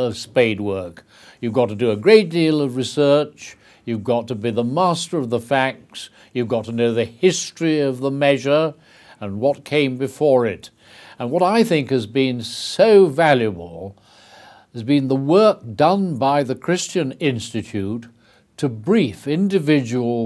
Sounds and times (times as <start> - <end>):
Male speech, man speaking: 0.0 - 14.0, 14.8 - 20.2
Narration, monologue: 0.0 - 20.2.